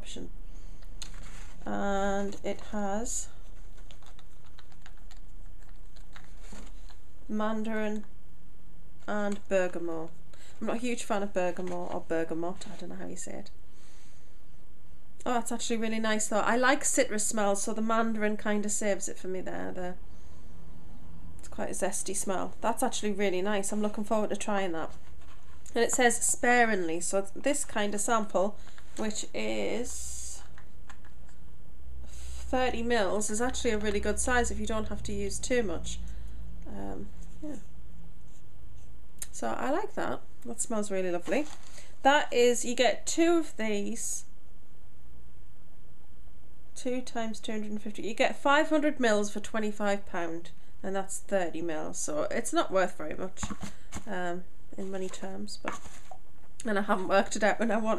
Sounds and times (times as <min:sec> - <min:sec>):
Speech: 0:00.0 - 0:00.3, 0:01.6 - 0:03.4, 0:07.3 - 0:08.1, 0:09.1 - 0:13.6, 0:15.2 - 0:20.0, 0:21.5 - 0:25.0, 0:25.7 - 0:30.5, 0:32.5 - 0:36.0, 0:36.7 - 0:37.6, 0:39.2 - 0:44.3, 0:46.8 - 0:55.8, 0:56.6 - 0:57.9.